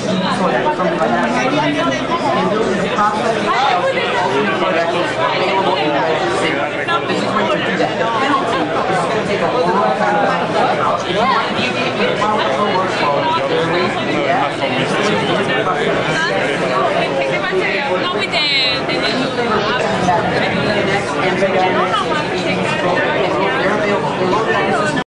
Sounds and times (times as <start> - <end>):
Speech: 0.0 - 25.0.